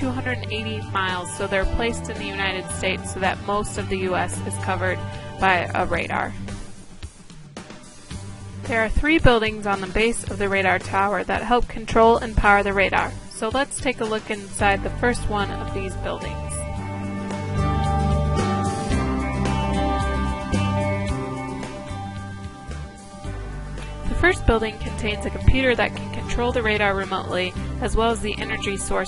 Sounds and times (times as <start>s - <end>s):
Speech: 0.0s - 6.4s, 8.7s - 16.7s, 24.1s - 29.0s
Music: 0.0s - 29.0s.